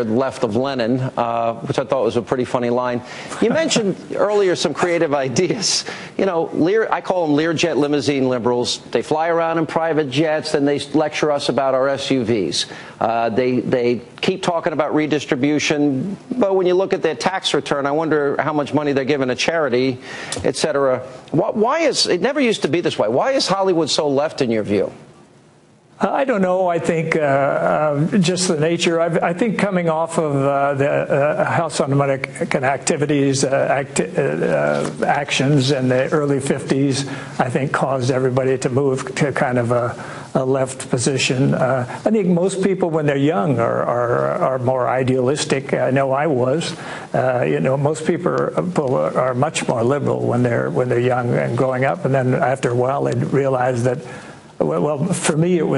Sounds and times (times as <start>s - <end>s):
Male speech, man speaking: 0.0s - 25.0s, 26.0s - 55.7s
Narration, monologue: 0.0s - 55.7s.